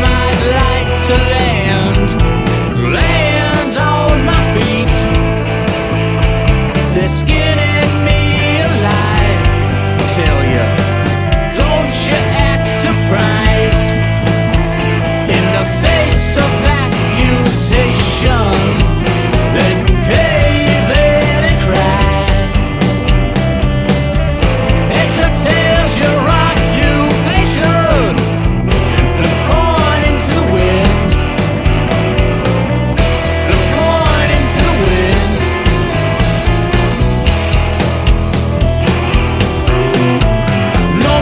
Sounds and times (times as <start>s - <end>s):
Music: 0.0s - 41.2s.